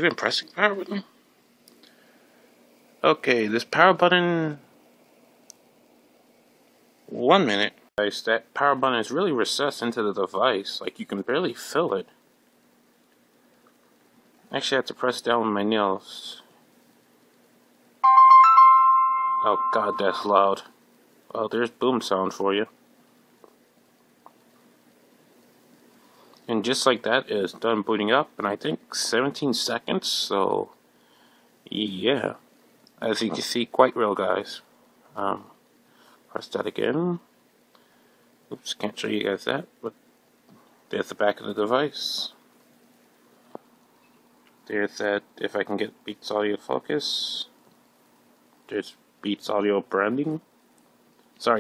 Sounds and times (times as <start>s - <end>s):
Speech: 0.0s - 1.1s, 3.0s - 4.6s, 7.1s - 12.2s, 14.5s - 16.5s, 19.4s - 20.7s, 21.3s - 22.8s, 26.5s - 30.8s, 31.7s - 32.4s, 33.0s - 35.6s, 36.3s - 37.3s, 38.5s - 40.0s, 40.9s - 42.4s, 44.7s - 47.6s, 48.7s - 50.5s, 51.4s - 51.6s
Inside, small room: 0.0s - 51.6s.